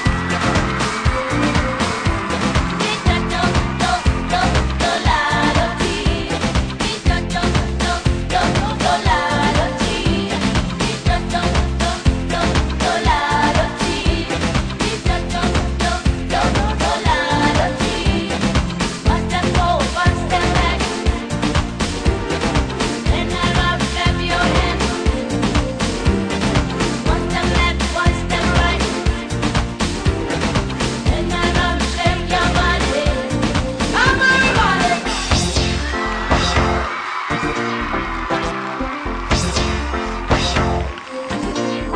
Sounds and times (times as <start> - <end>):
Music: 0.0 - 41.9.